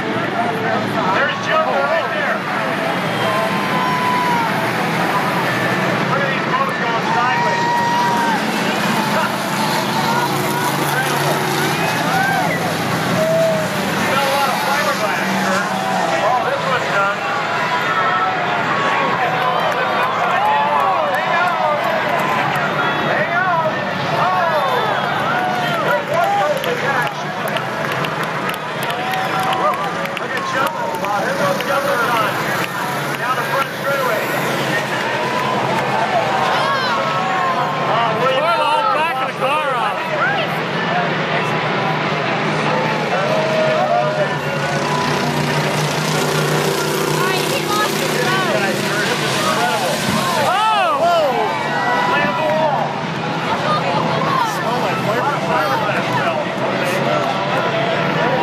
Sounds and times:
Vehicle: 0:00.0 - 0:58.4
Speech: 0:04.9 - 0:12.6, 0:13.2 - 0:58.4.

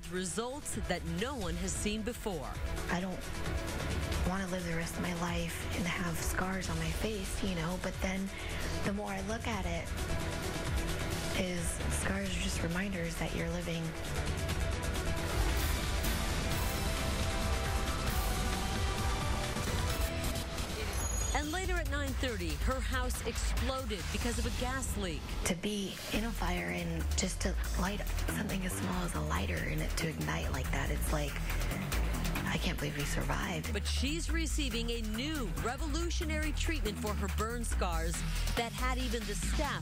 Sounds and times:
Speech: 0:00.0 - 0:03.2, 0:04.2 - 0:09.8, 0:11.4 - 0:13.9, 0:21.3 - 0:31.4, 0:32.4 - 0:39.8
Music: 0:00.0 - 0:39.8.

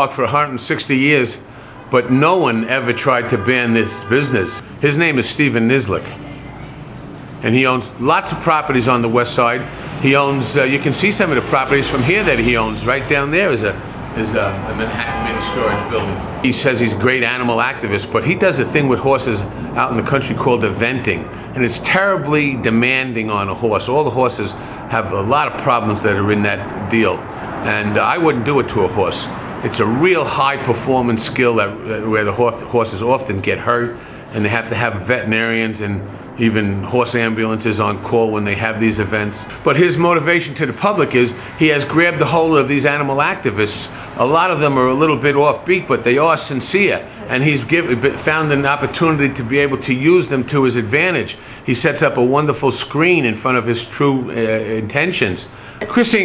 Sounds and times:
Speech: 0:00.0 - 0:06.8, 0:07.4 - 0:56.2.

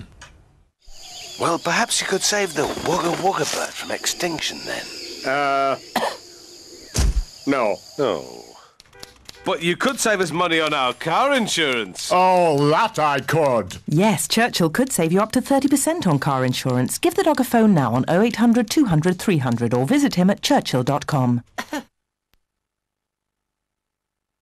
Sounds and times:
Speech: 0:01.4 - 0:05.8, 0:09.5 - 0:21.4.

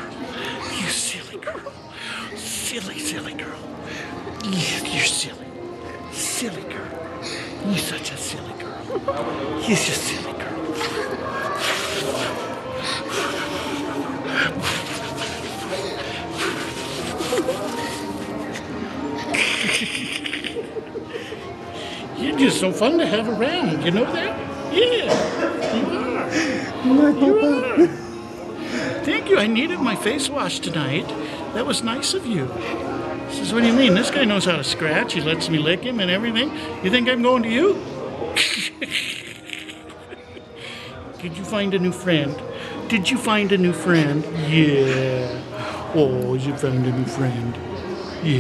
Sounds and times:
Music: 0:00.0 - 0:48.4.

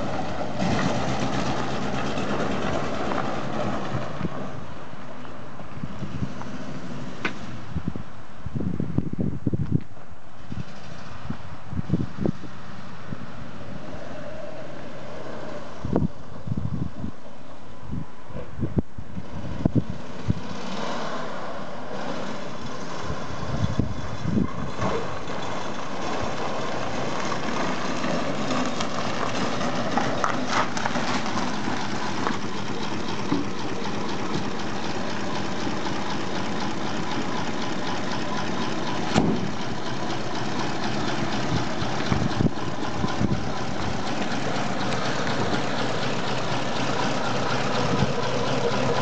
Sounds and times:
Wind noise (microphone): 0:05.7 - 0:06.4, 0:07.6 - 0:13.4, 0:15.8 - 0:20.5, 0:23.0 - 0:25.0, 0:42.1 - 0:43.6.

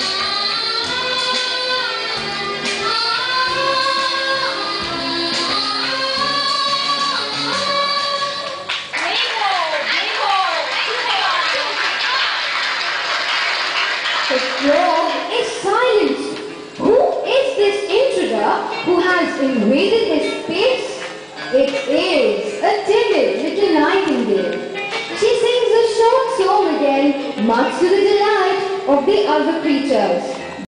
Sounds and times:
Music: 0:00.0 - 0:30.6
Speech: 0:14.3 - 0:24.6, 0:25.2 - 0:30.4.

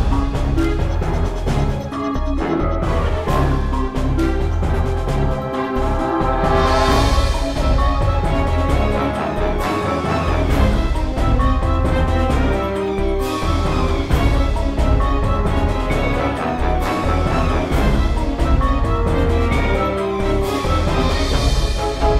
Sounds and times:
Music: 0:00.0 - 0:22.1.

